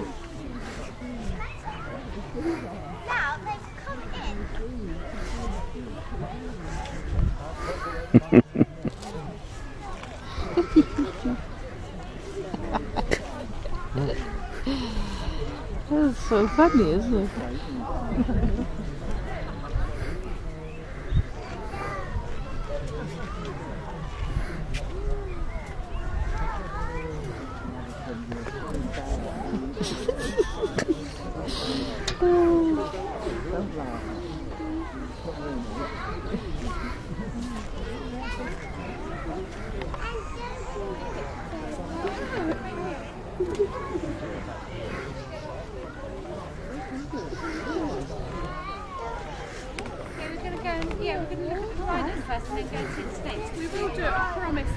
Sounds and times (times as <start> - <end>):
Speech: 0.0 - 54.7.